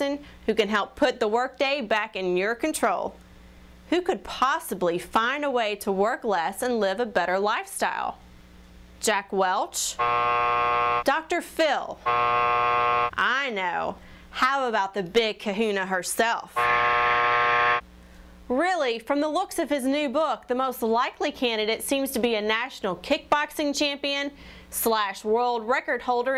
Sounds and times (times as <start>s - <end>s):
Speech: 0.0s - 3.2s, 3.9s - 8.2s, 9.0s - 10.0s, 11.1s - 12.0s, 13.2s - 16.6s, 18.5s - 26.3s.